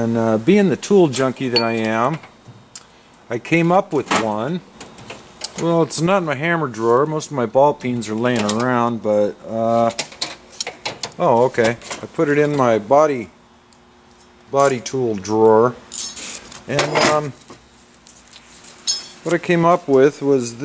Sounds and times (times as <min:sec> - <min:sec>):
Speech: 0:00.0 - 0:02.2, 0:03.3 - 0:04.6, 0:05.6 - 0:10.0, 0:11.2 - 0:13.4, 0:14.5 - 0:15.8, 0:16.7 - 0:17.4, 0:19.2 - 0:20.6.